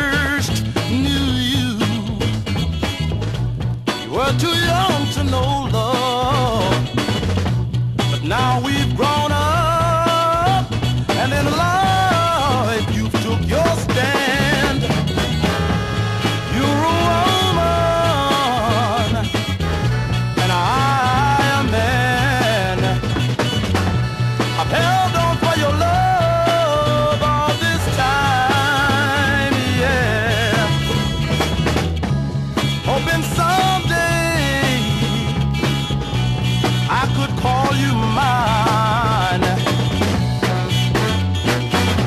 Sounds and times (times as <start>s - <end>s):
Soul music: 0.0s - 42.0s.